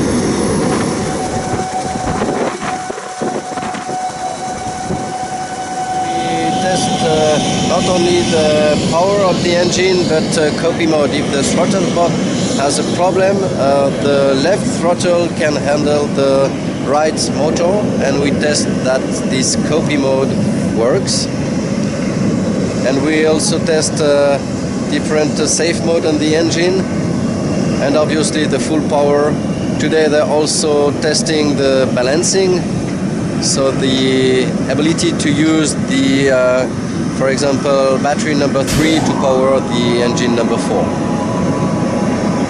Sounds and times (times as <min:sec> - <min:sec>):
Propeller, airscrew: 0:00.0 - 0:38.8
Speech: 0:06.1 - 0:21.4, 0:22.8 - 0:26.9, 0:27.8 - 0:32.7, 0:33.4 - 0:40.9.